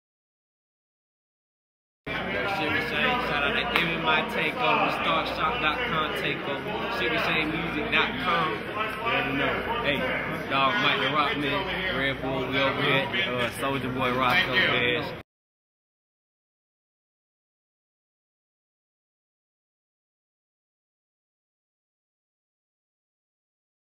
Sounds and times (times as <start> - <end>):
Speech: 2.1 - 15.2.